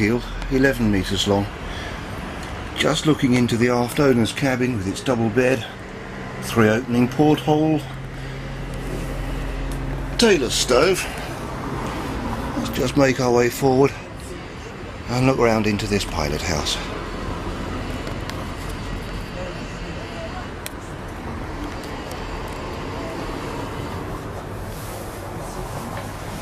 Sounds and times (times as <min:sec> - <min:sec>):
Speech: 0:00.0 - 0:01.5, 0:02.8 - 0:05.8, 0:06.4 - 0:07.9, 0:10.2 - 0:11.2, 0:12.6 - 0:16.9.